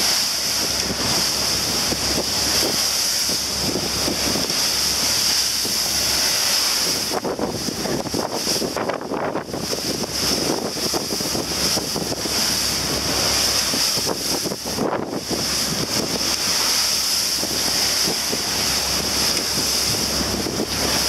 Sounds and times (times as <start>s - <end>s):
Boat, Water vehicle: 0.0s - 21.0s.